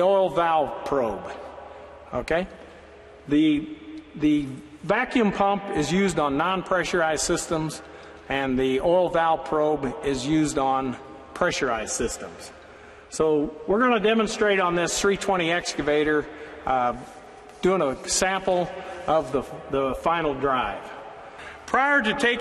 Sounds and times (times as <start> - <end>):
Speech: 0.0 - 1.4, 2.1 - 2.6, 3.3 - 21.0, 21.7 - 22.4.